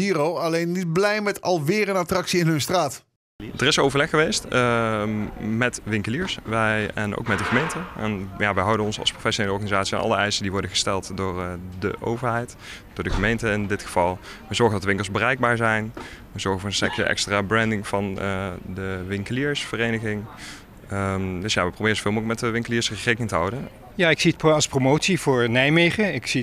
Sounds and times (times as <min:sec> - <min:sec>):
Speech: 0:00.0 - 0:26.4.